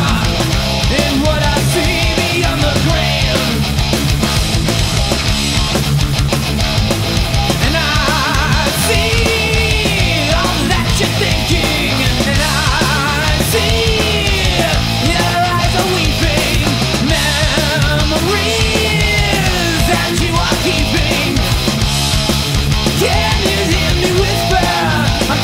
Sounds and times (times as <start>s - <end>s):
Punk rock: 0.0s - 25.4s.